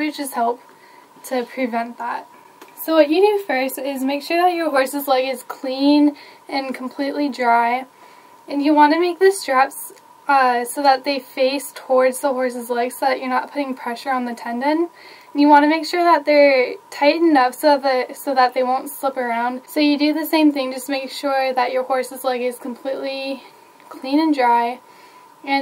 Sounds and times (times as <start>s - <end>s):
Speech: 0.0s - 0.6s, 1.2s - 7.9s, 8.5s - 24.8s.